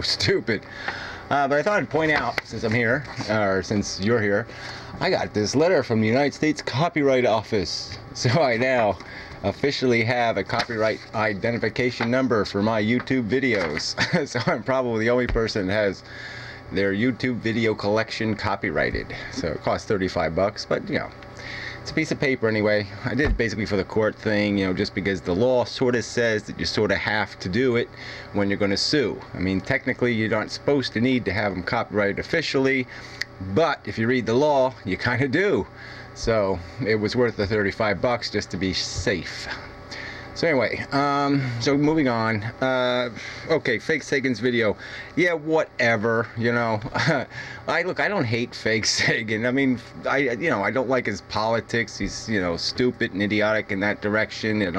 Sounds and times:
Speech: 0.0s - 0.7s, 1.3s - 16.1s, 16.7s - 21.2s, 21.8s - 39.6s, 40.4s - 54.7s.

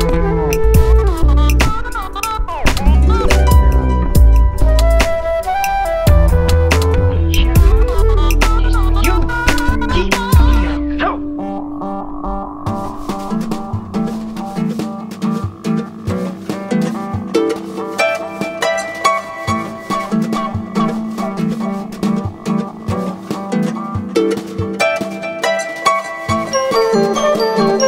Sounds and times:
Ukulele: 0.0s - 11.4s, 12.7s - 27.8s
Jazz: 0.0s - 27.8s.

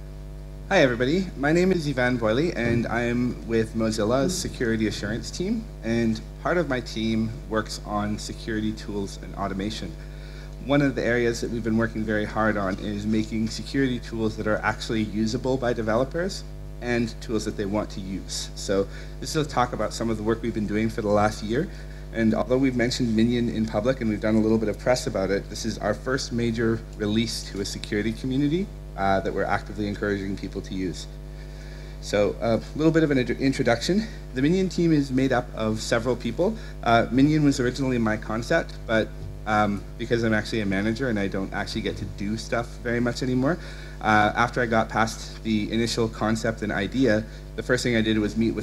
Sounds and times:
Speech: 0.7s - 10.0s, 10.6s - 31.2s, 32.0s - 48.6s.

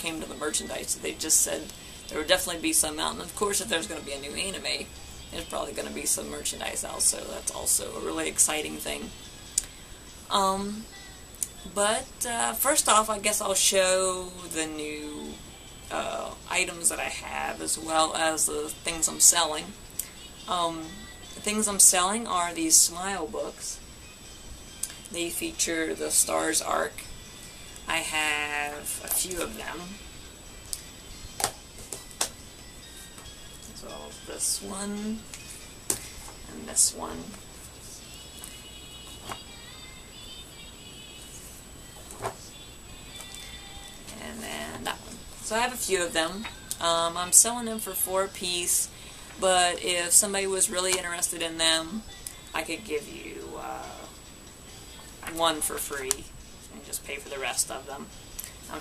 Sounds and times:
Speech: 0.0s - 9.1s, 10.3s - 10.9s, 11.5s - 19.8s, 20.5s - 23.8s, 25.1s - 27.0s, 27.9s - 30.0s, 33.7s - 35.2s, 36.5s - 37.4s, 44.1s - 52.0s, 52.6s - 54.1s, 55.2s - 58.1s
Inside, small room: 0.0s - 58.8s
Music: 0.0s - 58.8s.

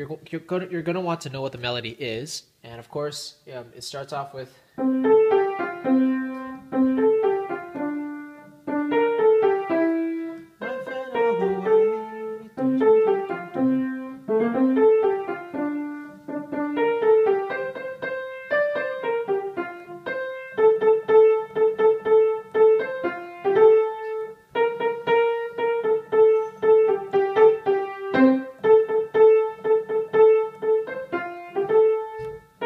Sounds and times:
Speech: 0.0s - 4.6s, 10.3s - 12.5s
Music: 4.8s - 32.6s.

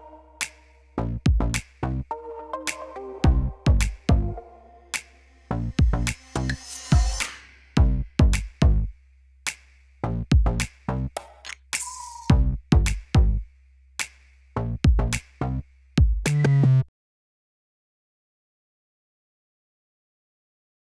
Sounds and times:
Music: 0.0s - 16.9s.

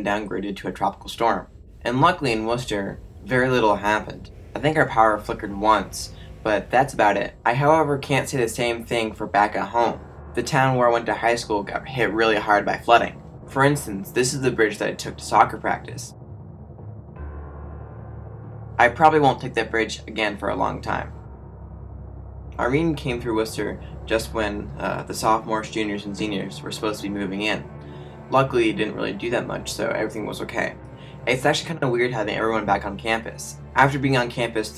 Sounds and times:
Speech: 0.0s - 16.1s, 18.8s - 21.2s, 22.6s - 27.7s, 28.3s - 34.7s
Music: 0.0s - 34.7s.

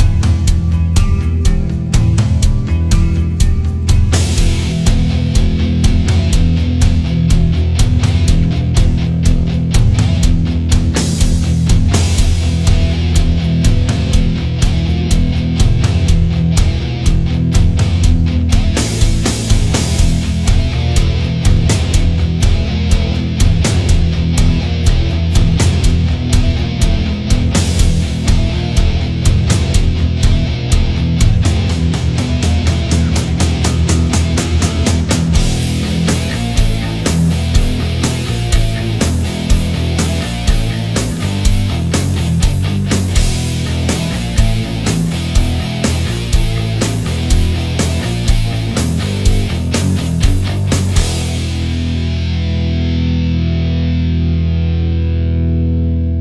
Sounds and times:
Rimshot: 0.0s - 52.0s
Bass drum: 0.0s - 54.8s
Drum kit: 0.0s - 54.8s.

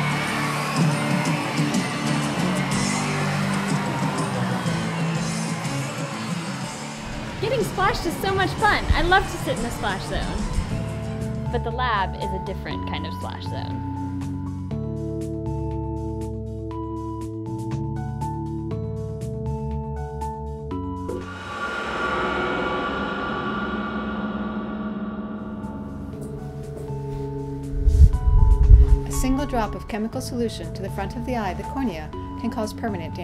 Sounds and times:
Music: 0.0s - 33.2s
Speech: 7.3s - 10.5s, 11.5s - 13.8s, 29.1s - 33.2s.

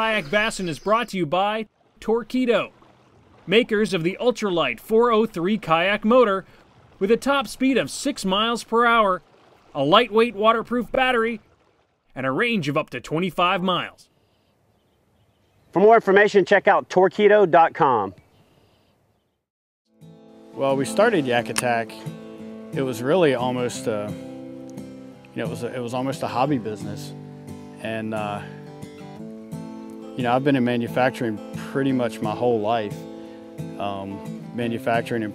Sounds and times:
Speech: 0.0s - 2.7s, 3.5s - 6.4s, 7.0s - 9.2s, 9.8s - 11.4s, 12.2s - 14.0s, 15.8s - 18.2s, 20.6s - 22.1s, 22.8s - 24.2s, 25.4s - 27.2s, 27.8s - 28.5s, 30.2s - 33.0s, 33.8s - 35.3s
Music: 19.9s - 35.3s.

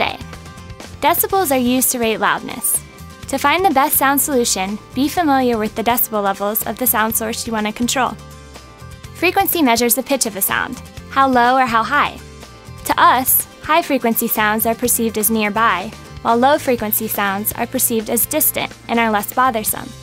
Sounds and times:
Speech: 0.0s - 0.2s, 1.0s - 8.2s, 9.2s - 12.2s, 12.9s - 20.0s
Music: 0.0s - 20.0s.

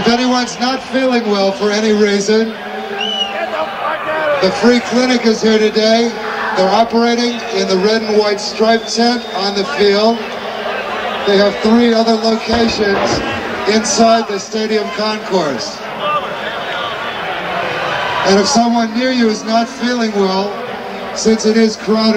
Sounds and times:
Crowd: 0.0s - 22.1s.

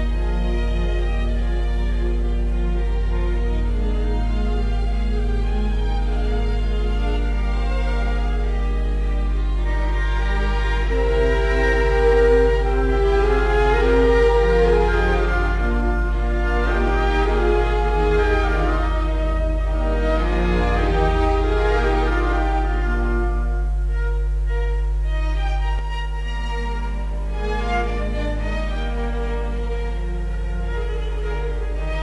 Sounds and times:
Violin, fiddle: 0.0s - 32.0s.

